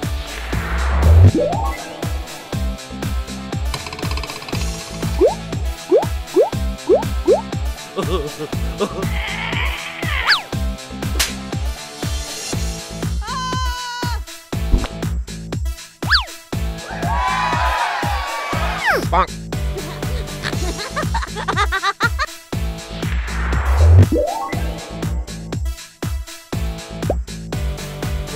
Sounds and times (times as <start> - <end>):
Music: 0.0 - 28.3.